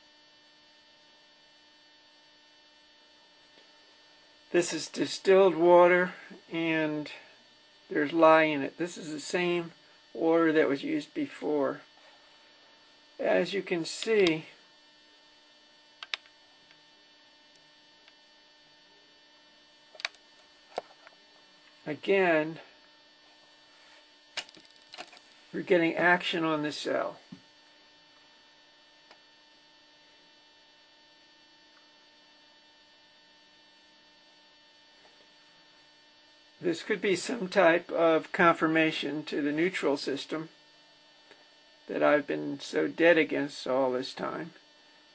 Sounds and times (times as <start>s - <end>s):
Speech: 4.5s - 7.3s, 7.9s - 11.9s, 13.2s - 14.6s, 21.8s - 22.7s, 25.5s - 27.2s, 36.6s - 40.5s, 41.9s - 44.6s.